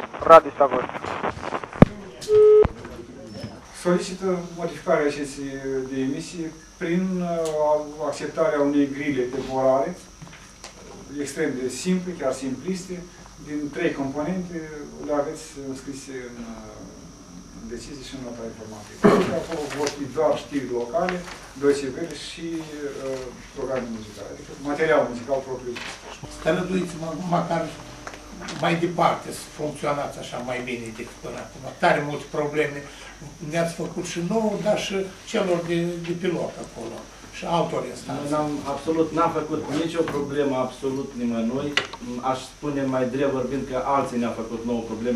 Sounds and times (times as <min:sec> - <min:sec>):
Speech: 0:00.2 - 0:00.9, 0:01.9 - 0:10.1, 0:10.8 - 0:17.0, 0:17.6 - 0:27.8, 0:28.4 - 0:45.1.